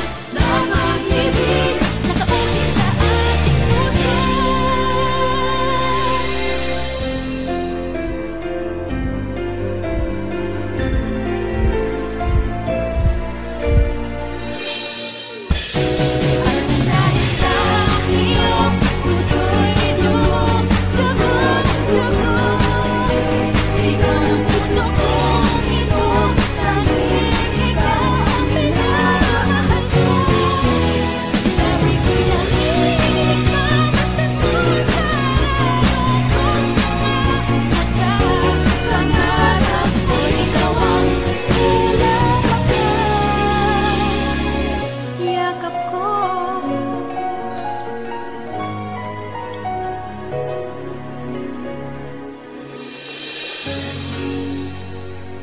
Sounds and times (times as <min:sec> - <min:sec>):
Music: 0:00.0 - 0:55.4.